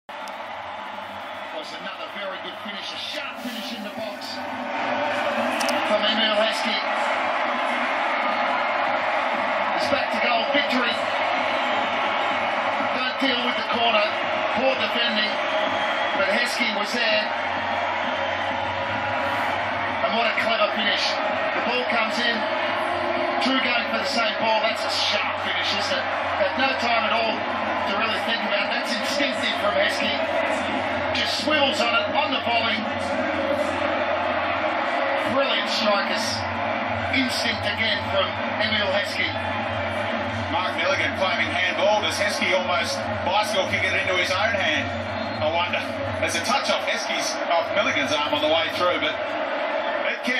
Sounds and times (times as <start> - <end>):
Speech: 1.5 - 4.4, 5.7 - 6.9, 9.8 - 11.1, 12.9 - 15.4, 16.2 - 17.3, 20.0 - 22.5, 23.4 - 30.3, 31.1 - 33.1, 35.2 - 36.5, 37.1 - 39.4, 40.5 - 49.2, 50.0 - 50.3.